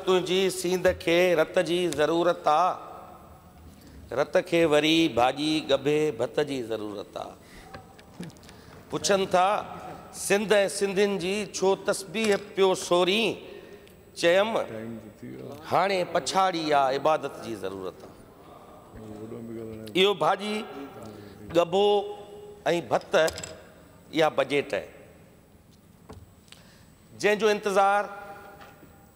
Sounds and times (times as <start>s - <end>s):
Male speech, man speaking: 0.0s - 2.8s, 4.1s - 7.4s, 8.9s - 13.4s, 14.2s - 18.0s, 19.0s - 23.4s, 24.1s - 24.9s, 27.2s - 28.2s
Narration, monologue: 0.0s - 29.1s.